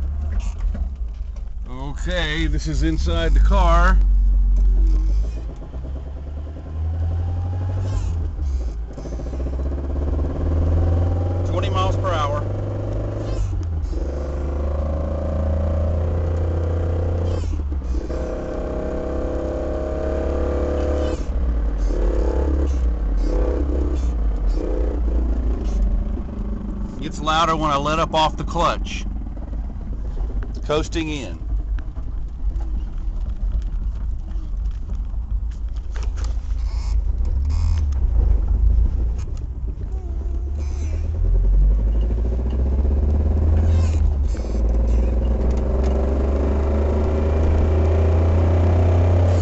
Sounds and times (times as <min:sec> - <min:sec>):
Speech: 0:01.7 - 0:04.0, 0:11.4 - 0:12.4, 0:27.0 - 0:29.1, 0:30.6 - 0:31.4.